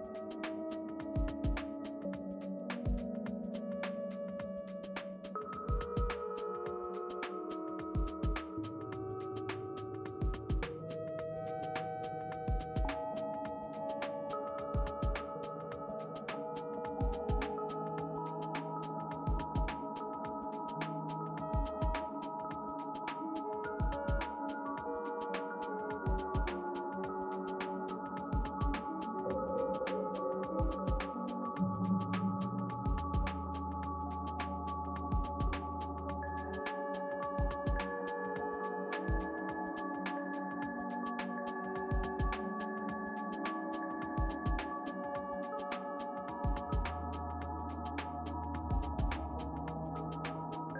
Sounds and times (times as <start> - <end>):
Music: 0.0 - 50.8.